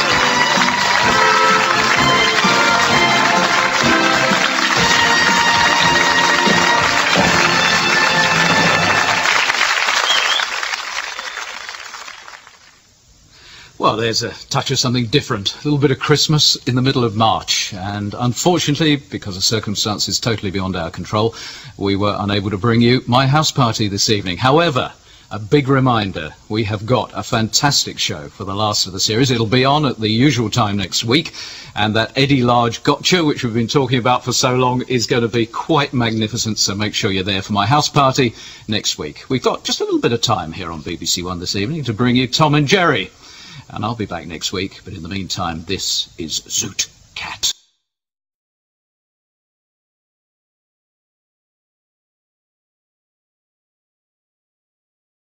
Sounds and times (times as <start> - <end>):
Narration, monologue: 13.2 - 47.8.